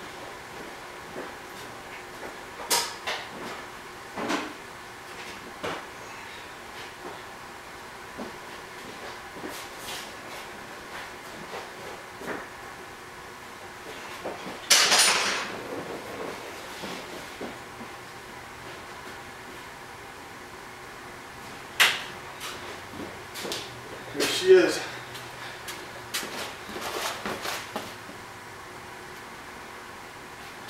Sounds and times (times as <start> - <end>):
Speech: 24.2 - 25.0.